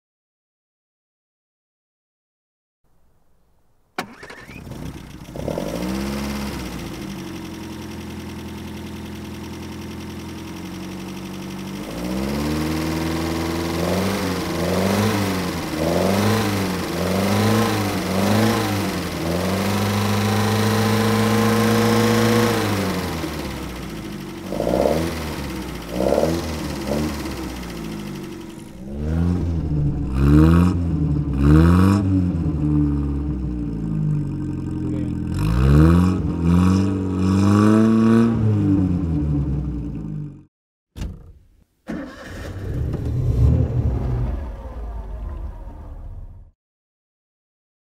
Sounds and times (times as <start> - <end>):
Vehicle: 3.1 - 41.3, 41.9 - 46.6
Accelerating, revving, vroom: 5.4 - 6.8, 11.8 - 23.6, 24.5 - 27.5, 28.8 - 33.2, 35.3 - 39.2, 42.6 - 44.3.